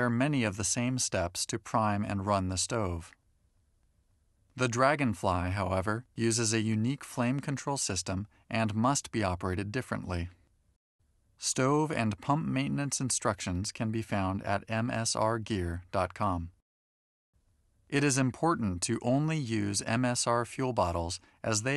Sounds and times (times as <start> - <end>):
Speech: 0.0 - 3.2, 4.6 - 10.4, 11.4 - 16.6, 17.9 - 21.7.